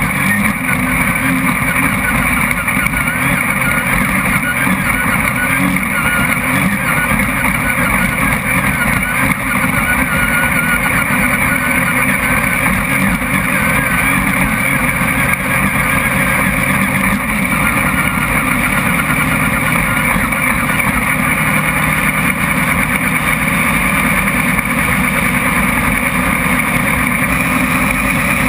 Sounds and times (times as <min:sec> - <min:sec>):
Car: 0:00.0 - 0:28.4.